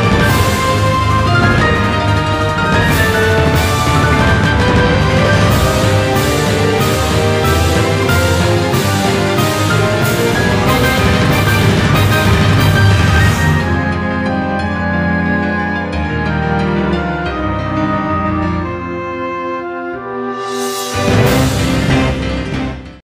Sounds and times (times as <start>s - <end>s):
Soundtrack music: 0.0s - 23.0s.